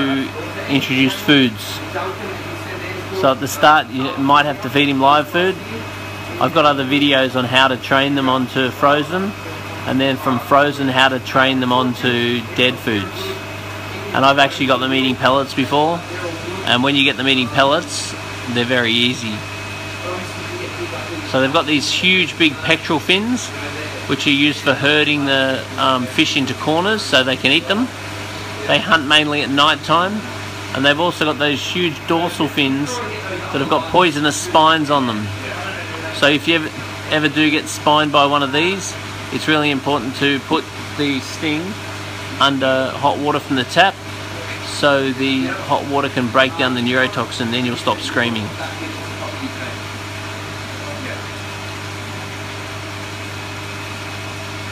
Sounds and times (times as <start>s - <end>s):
Speech: 0.0s - 19.4s, 20.0s - 28.0s, 28.6s - 41.8s, 42.4s - 49.8s.